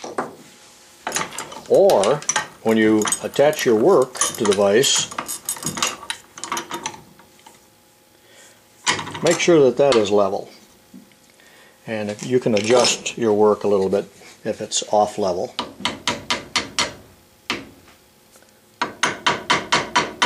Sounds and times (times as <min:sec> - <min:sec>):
Speech: 0:01.7 - 0:05.1, 0:09.2 - 0:10.6, 0:11.9 - 0:15.6.